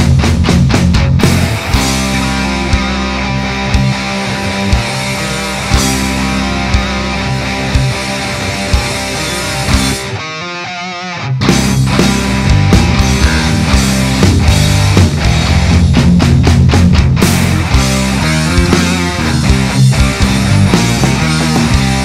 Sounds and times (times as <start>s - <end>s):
Music: 0.0s - 22.0s.